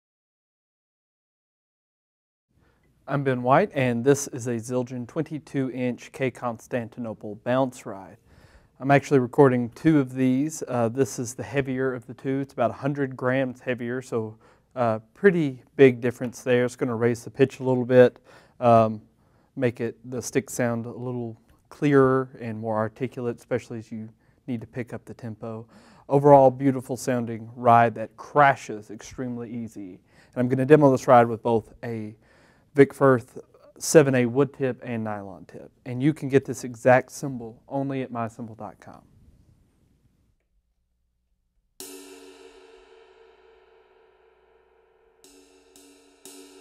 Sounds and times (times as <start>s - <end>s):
Speech: 3.1s - 8.2s, 8.8s - 32.2s, 32.8s - 39.1s.